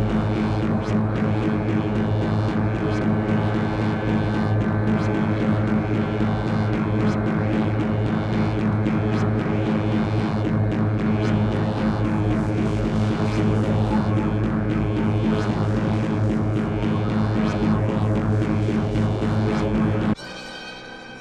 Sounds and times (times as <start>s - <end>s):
Throbbing: 0.0s - 20.3s.